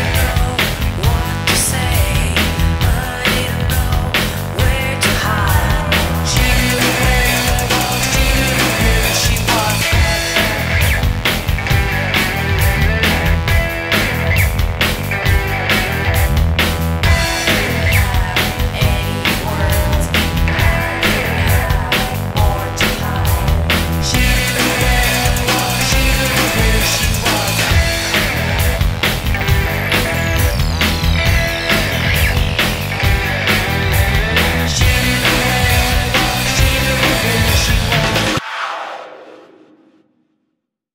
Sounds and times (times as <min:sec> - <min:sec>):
Disco: 0:00.0 - 0:38.4.